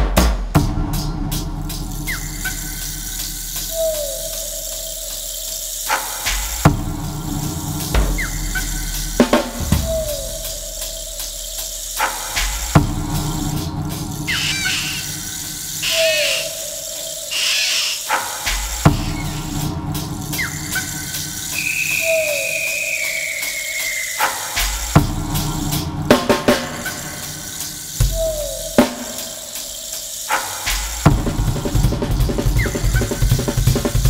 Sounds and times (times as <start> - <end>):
Drum: 0.0 - 34.1
Drum kit: 0.0 - 34.1.